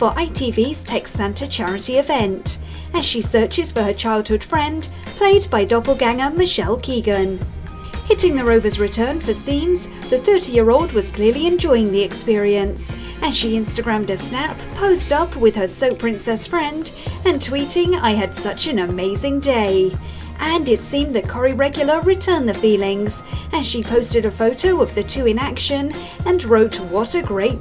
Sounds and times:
Speech: 0.0 - 7.4, 8.1 - 27.6
Music: 0.0 - 27.6.

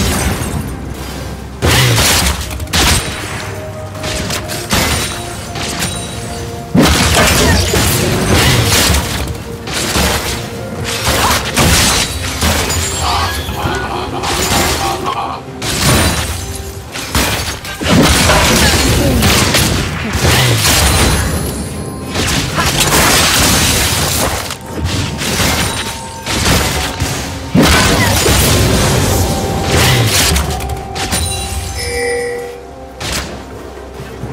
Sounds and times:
Music: 0.0 - 34.3
Outside, rural or natural: 0.0 - 34.3
Shatter: 1.6 - 13.4, 15.6 - 31.9.

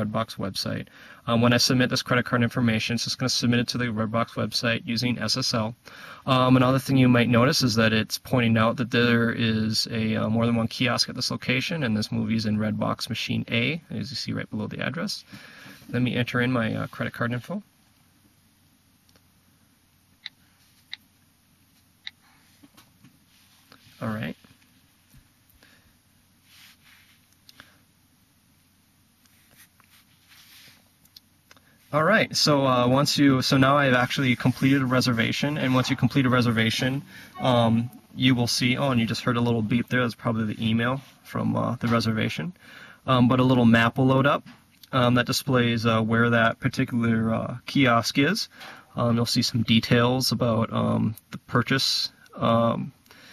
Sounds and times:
Speech: 0.0 - 15.3, 15.9 - 17.7, 24.0 - 24.5, 31.9 - 53.0
Inside, small room: 0.0 - 53.3.

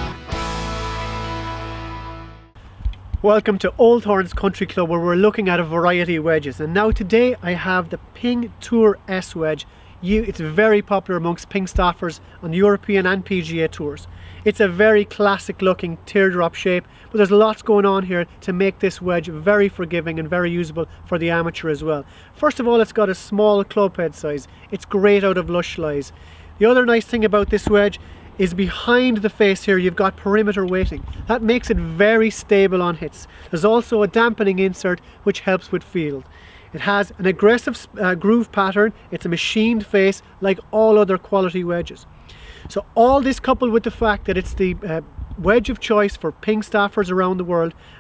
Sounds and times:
Speech: 3.2 - 42.1, 42.7 - 47.8.

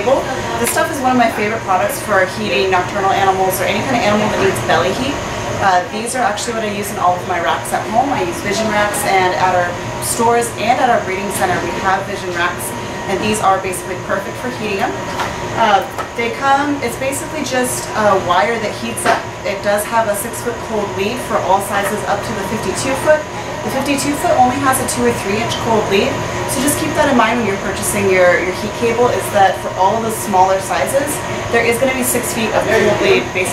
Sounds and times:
Speech: 0.0 - 15.0, 15.6 - 33.5.

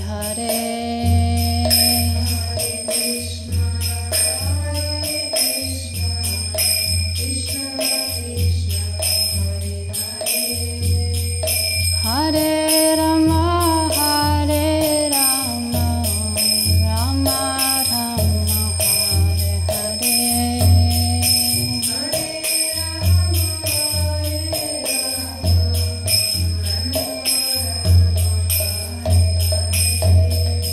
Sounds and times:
Mantra: 0.0 - 30.7.

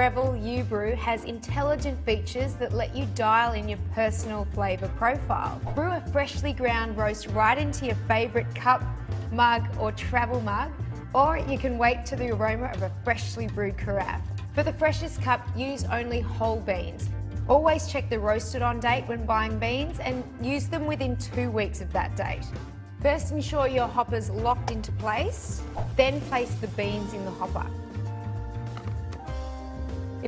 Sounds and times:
Speech: 0.0 - 27.8
Music: 0.0 - 30.2.

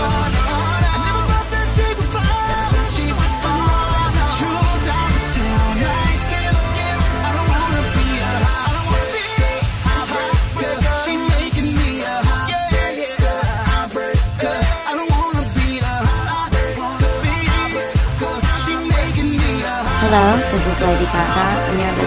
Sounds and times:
Rhythm and blues: 0.0 - 22.0.

